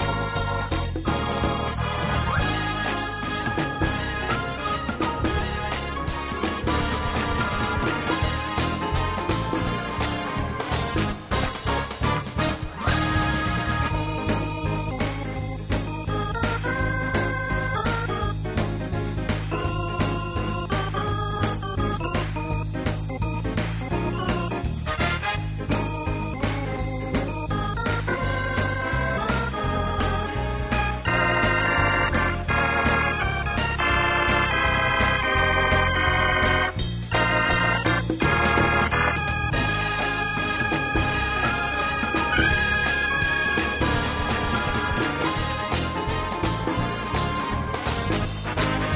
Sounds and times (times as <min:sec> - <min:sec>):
Electric piano: 0:00.0 - 0:48.9
Organ: 0:00.0 - 0:48.9
Synthesizer: 0:00.0 - 0:48.9.